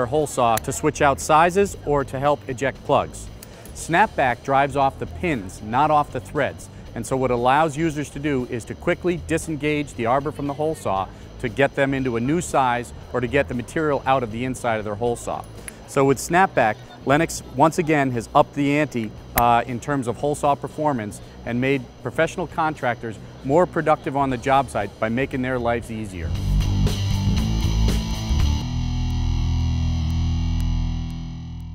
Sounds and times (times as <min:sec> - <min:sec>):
Speech: 0:00.0 - 0:26.3.